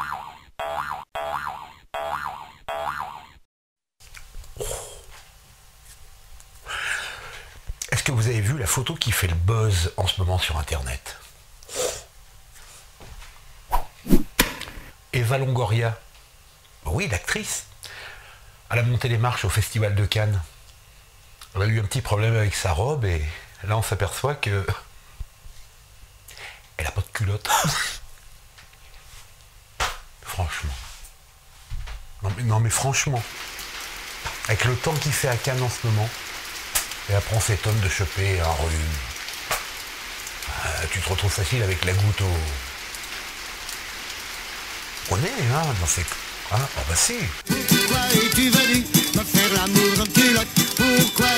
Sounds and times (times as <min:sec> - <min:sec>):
Speech: 0:07.8 - 0:11.3, 0:15.1 - 0:16.0, 0:16.8 - 0:17.7, 0:18.7 - 0:20.5, 0:21.5 - 0:24.9, 0:26.8 - 0:28.0, 0:30.2 - 0:30.9, 0:32.2 - 0:33.3, 0:34.4 - 0:36.2, 0:37.1 - 0:39.1, 0:40.4 - 0:42.7, 0:45.1 - 0:47.4.